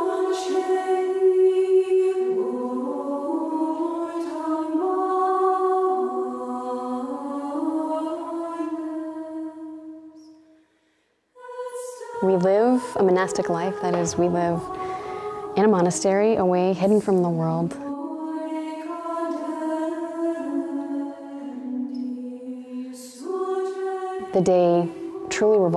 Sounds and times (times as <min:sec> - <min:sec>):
Music: 0:00.0 - 0:25.7
Speech: 0:12.2 - 0:14.8, 0:15.6 - 0:17.8, 0:24.3 - 0:25.7.